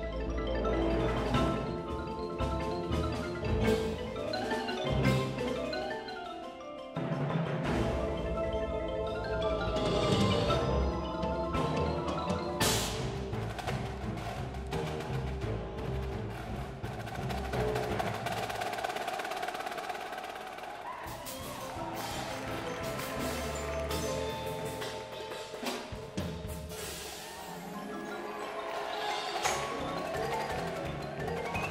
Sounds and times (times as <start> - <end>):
Percussion: 0.0 - 31.7.